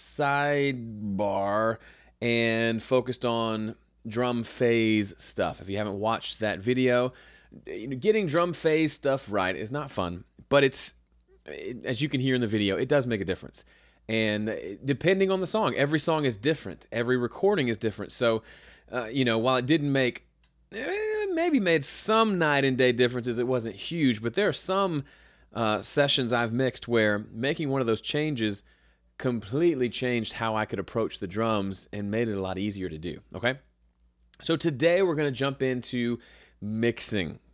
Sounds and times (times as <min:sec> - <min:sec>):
Speech: 0:00.0 - 0:28.6, 0:29.2 - 0:33.7, 0:34.4 - 0:37.5.